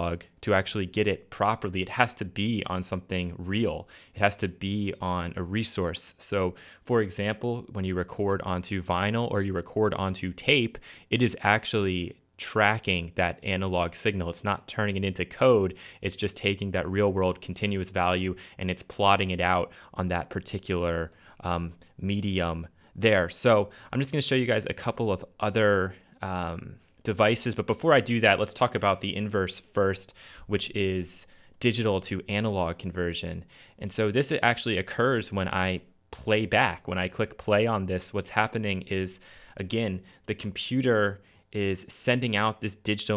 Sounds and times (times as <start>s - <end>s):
Speech: 0.0s - 43.1s.